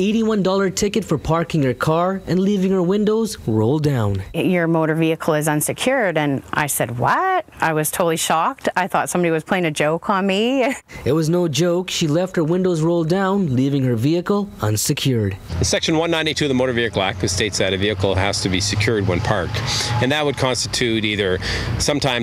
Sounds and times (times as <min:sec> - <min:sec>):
Speech: 0:00.0 - 0:22.2.